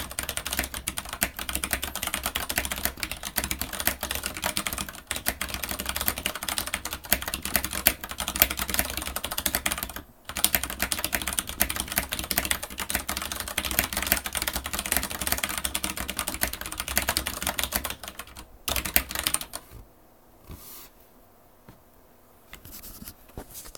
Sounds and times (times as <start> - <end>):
Computer keyboard: 0.0 - 19.8.